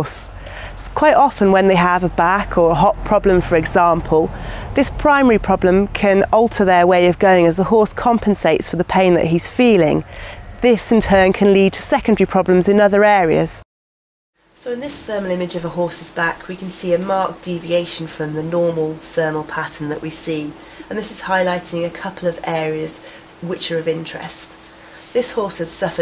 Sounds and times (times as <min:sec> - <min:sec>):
Speech: 0:00.0 - 0:10.0, 0:10.6 - 0:13.6, 0:14.6 - 0:26.0.